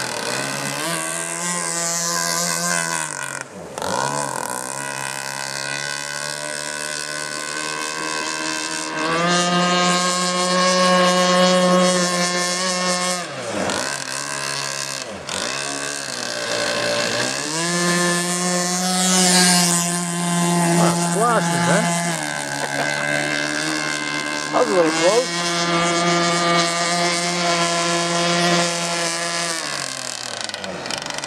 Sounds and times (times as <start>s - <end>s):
Motorboat, speedboat: 0.0s - 31.2s.